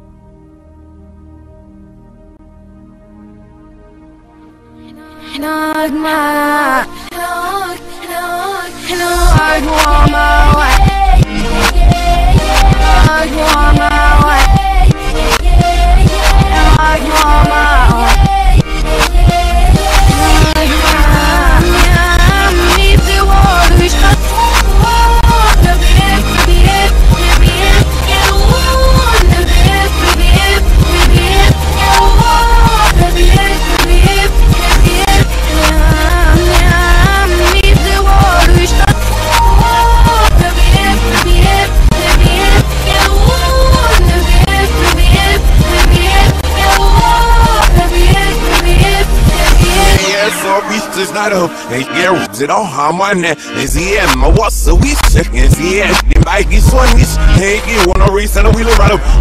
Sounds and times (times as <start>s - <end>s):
Music: 0.0s - 59.2s.